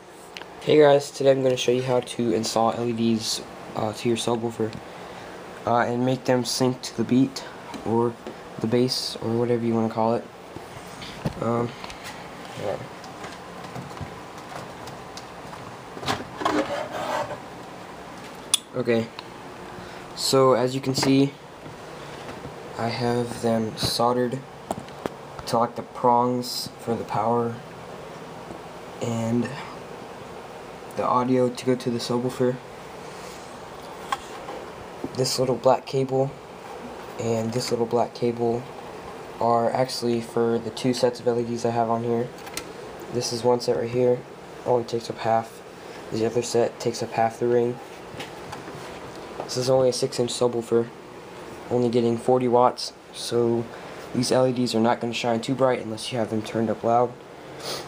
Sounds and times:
Speech: 0:00.6 - 0:04.8, 0:05.6 - 0:10.3, 0:11.3 - 0:11.8, 0:12.6 - 0:12.9, 0:18.6 - 0:19.2, 0:20.2 - 0:21.4, 0:22.7 - 0:24.5, 0:25.4 - 0:27.6, 0:29.0 - 0:29.8, 0:30.9 - 0:32.7, 0:35.1 - 0:36.4, 0:37.2 - 0:38.7, 0:39.4 - 0:42.4, 0:43.1 - 0:47.8, 0:49.5 - 0:51.0, 0:51.7 - 0:57.2.

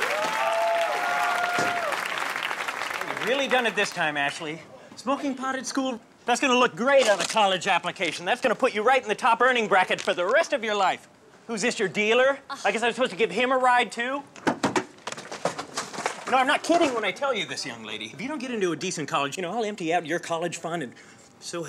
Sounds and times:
Speech: 0:16.3 - 0:21.6.

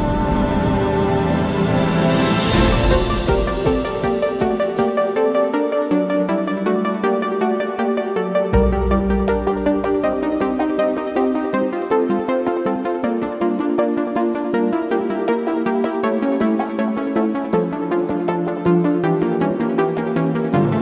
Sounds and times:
Music: 0:00.0 - 0:20.8.

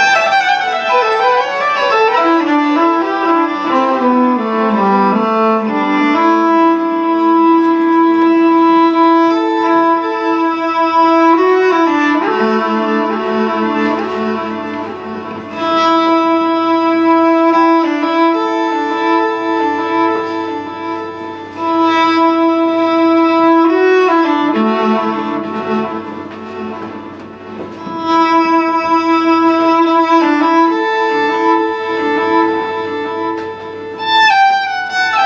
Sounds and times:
Violin, fiddle: 0:00.0 - 0:35.2.

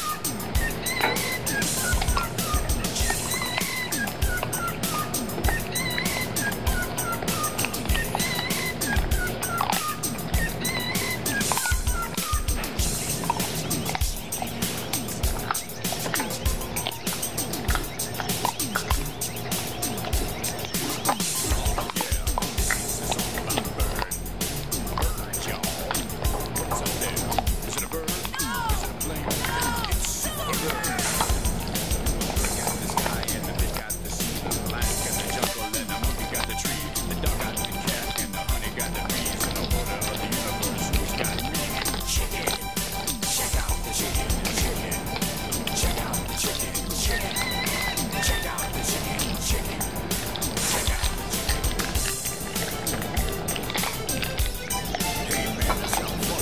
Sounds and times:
Music: 0:00.0 - 0:56.4.

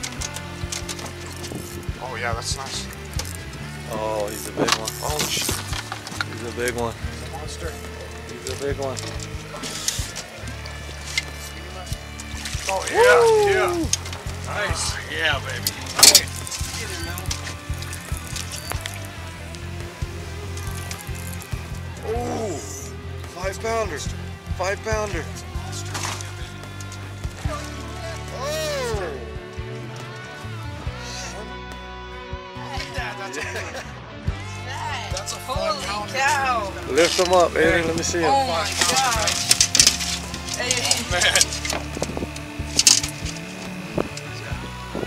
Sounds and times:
Music: 0:00.0 - 0:45.0
Speech: 0:02.0 - 0:02.9, 0:03.9 - 0:05.5, 0:34.7 - 0:39.4.

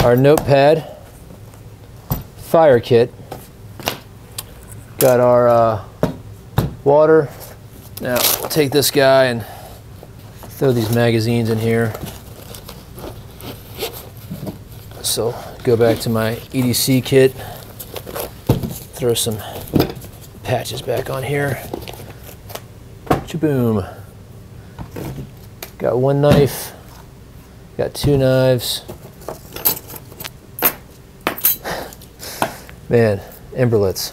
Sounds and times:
Speech: 0:00.0 - 0:01.0, 0:02.4 - 0:03.1, 0:05.0 - 0:05.9, 0:06.8 - 0:07.4, 0:08.0 - 0:09.5, 0:10.5 - 0:12.0, 0:15.0 - 0:17.4, 0:19.0 - 0:19.6, 0:20.4 - 0:21.8, 0:23.2 - 0:24.0, 0:25.8 - 0:26.8, 0:27.8 - 0:28.9, 0:32.9 - 0:34.1.

